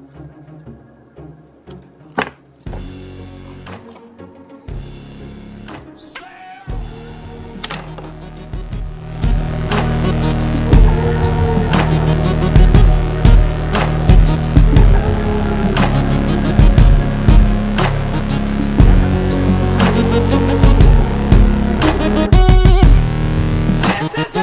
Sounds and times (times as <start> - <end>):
Music: 0.0 - 24.4.